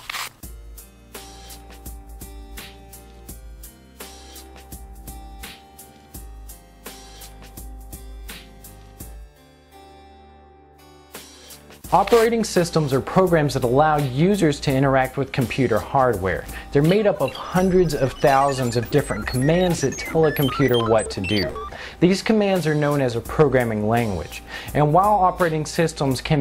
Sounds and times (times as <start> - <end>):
Music: 0.3 - 26.4.